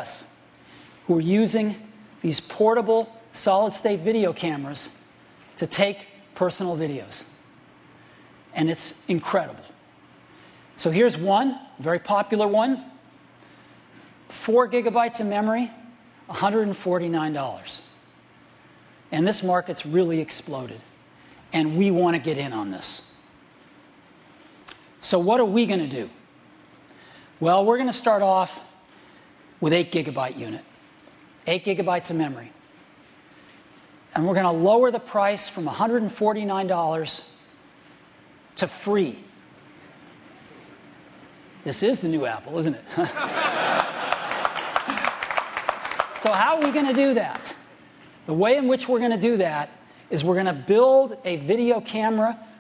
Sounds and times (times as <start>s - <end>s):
Speech: 0.0s - 0.4s, 1.1s - 5.0s, 5.6s - 7.4s, 8.5s - 9.8s, 10.8s - 13.0s, 14.3s - 18.0s, 19.1s - 20.9s, 21.5s - 23.1s, 25.0s - 26.2s, 27.4s - 28.8s, 29.6s - 30.7s, 31.4s - 32.6s, 34.1s - 37.4s, 38.6s - 39.3s, 41.6s - 43.0s, 46.2s - 47.7s, 48.3s - 52.5s.